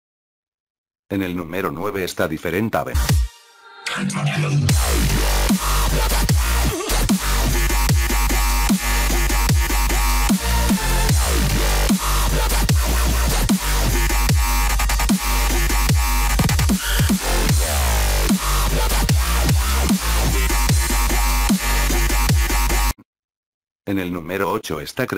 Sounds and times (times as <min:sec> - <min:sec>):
Speech: 0:01.1 - 0:03.0, 0:03.9 - 0:04.7, 0:23.9 - 0:25.1
Dubstep: 0:02.9 - 0:23.0.